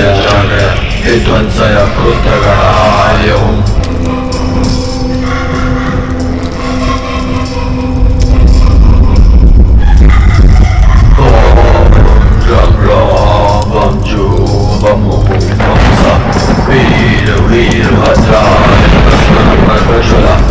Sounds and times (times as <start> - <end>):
Mantra: 0.0 - 3.7, 11.1 - 20.5.